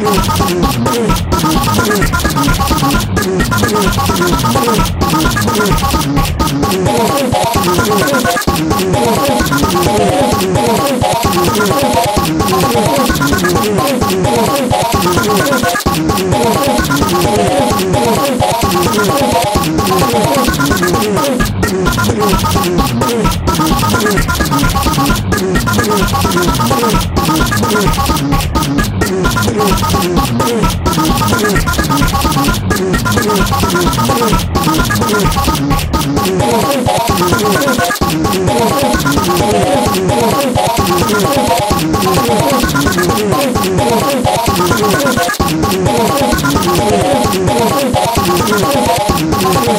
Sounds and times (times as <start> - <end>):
Music: 0.0 - 49.7.